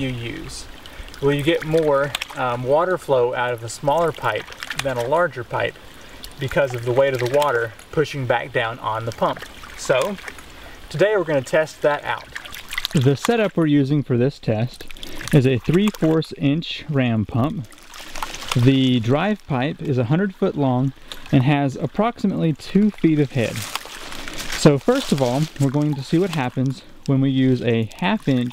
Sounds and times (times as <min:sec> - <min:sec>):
Speech: 0:00.0 - 0:05.8, 0:06.4 - 0:10.2, 0:10.9 - 0:12.3, 0:13.0 - 0:14.8, 0:15.4 - 0:17.7, 0:18.6 - 0:23.7, 0:24.6 - 0:28.5
Pump (liquid): 0:00.0 - 0:28.5.